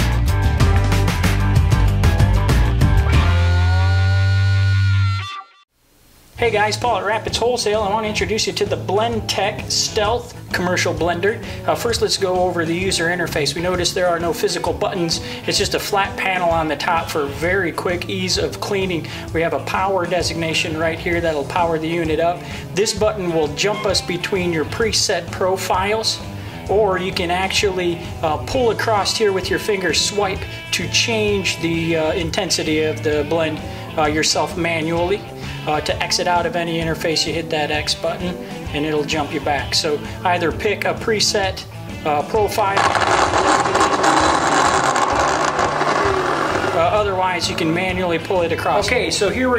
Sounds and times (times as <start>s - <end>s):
Music: 0.0s - 5.7s, 6.4s - 49.5s
Speech: 6.4s - 42.9s, 46.7s - 49.5s.